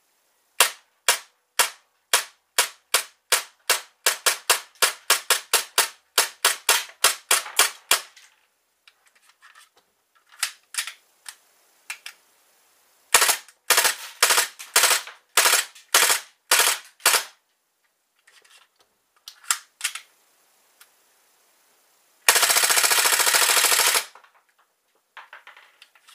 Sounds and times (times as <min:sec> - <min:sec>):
Inside, small room: 0:00.0 - 0:26.1.